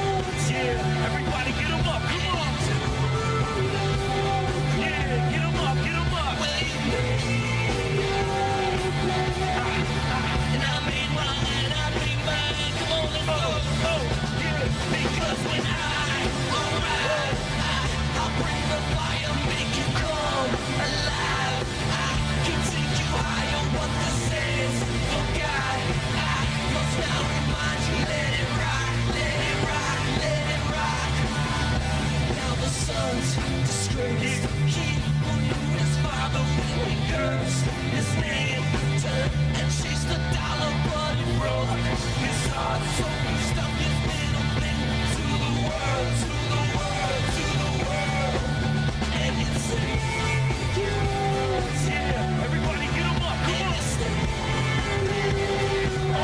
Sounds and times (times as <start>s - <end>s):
Speech: 0.0s - 31.0s, 49.2s - 56.2s
Music: 0.0s - 56.2s.